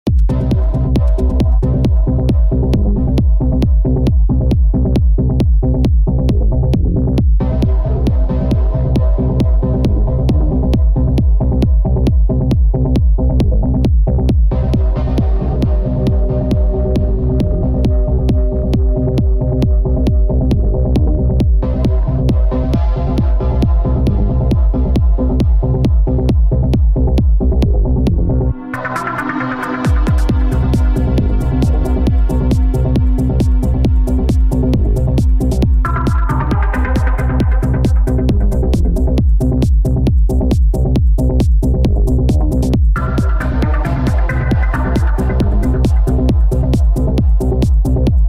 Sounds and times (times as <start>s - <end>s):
Electronica: 0.1s - 48.2s
House music: 0.1s - 48.2s
Trance music: 0.1s - 48.2s.